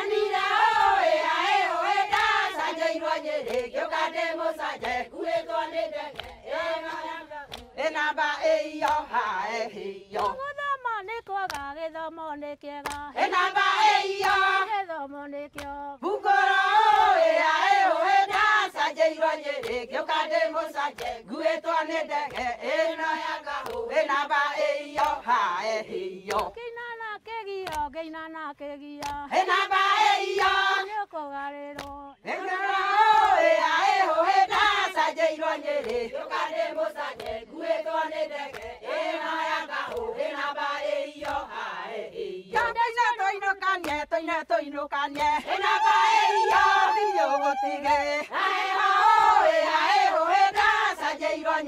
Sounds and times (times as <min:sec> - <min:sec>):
Female singing: 0:00.0 - 0:51.6.